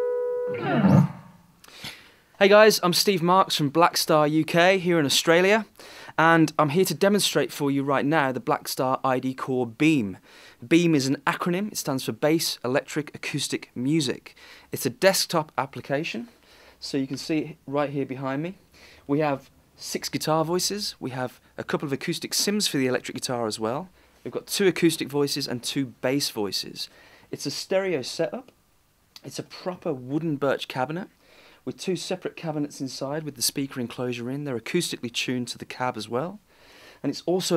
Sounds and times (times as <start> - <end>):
Speech: 2.4 - 28.6, 29.2 - 36.4, 37.0 - 37.5.